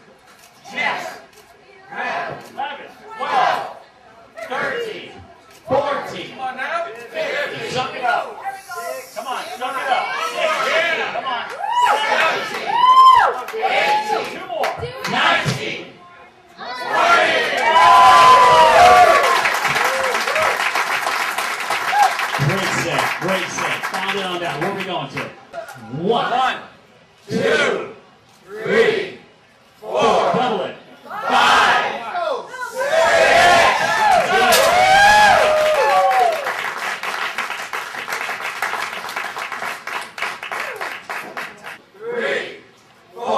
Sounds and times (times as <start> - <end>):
Inside, public space: 0.0 - 43.3.